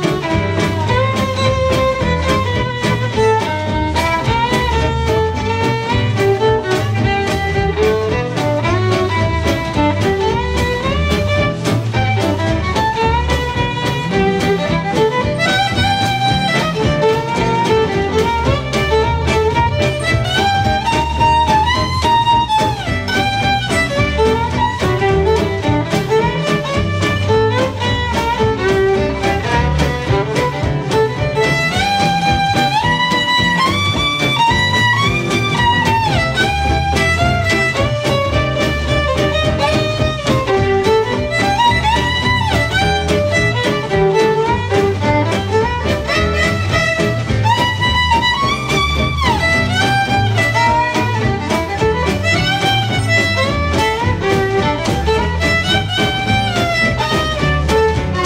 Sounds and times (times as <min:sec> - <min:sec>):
Music: 0:00.0 - 0:58.2.